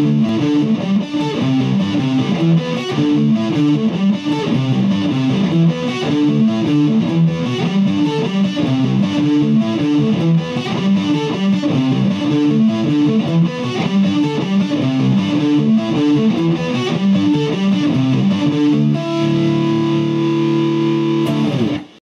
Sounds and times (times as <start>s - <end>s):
Electric guitar: 0.0s - 22.0s.